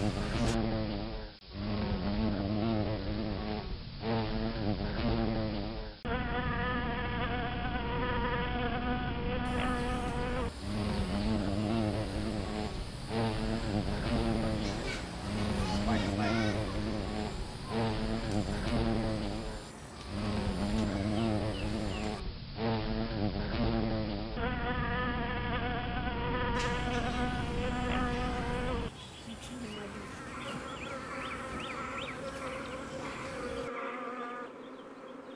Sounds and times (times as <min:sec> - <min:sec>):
Bee, wasp, etc.: 0:00.0 - 0:35.3
Fly, housefly: 0:00.0 - 0:35.3.